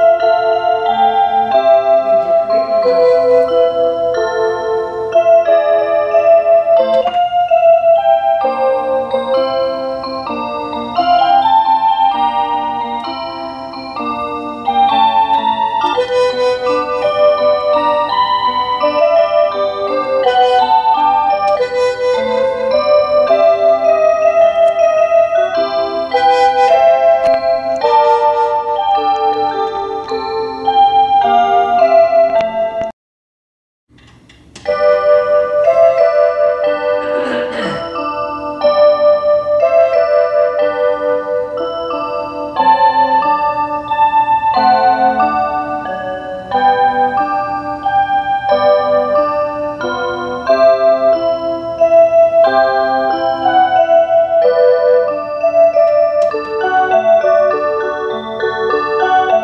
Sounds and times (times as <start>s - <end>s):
Music: 0.0s - 32.9s, 33.9s - 59.4s.